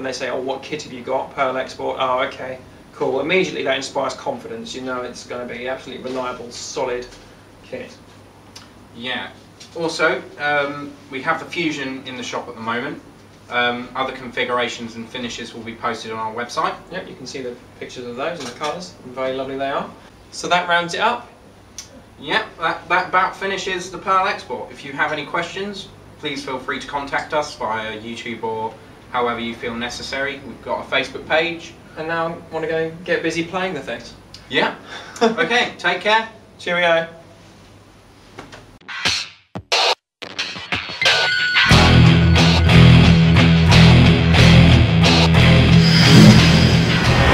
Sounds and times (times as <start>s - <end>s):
Speech: 0.0s - 8.0s, 9.0s - 37.2s.